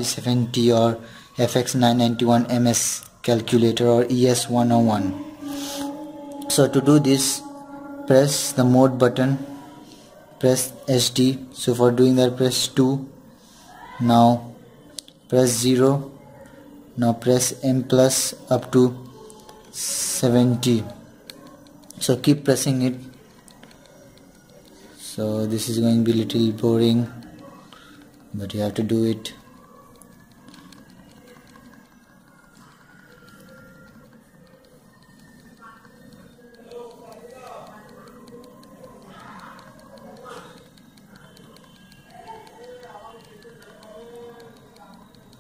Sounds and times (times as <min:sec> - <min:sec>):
Inside, small room: 0:00.0 - 0:45.4
Speech: 0:06.4 - 0:07.5, 0:08.1 - 0:09.6, 0:17.0 - 0:21.1, 0:22.0 - 0:23.1, 0:25.0 - 0:27.5, 0:28.3 - 0:29.5.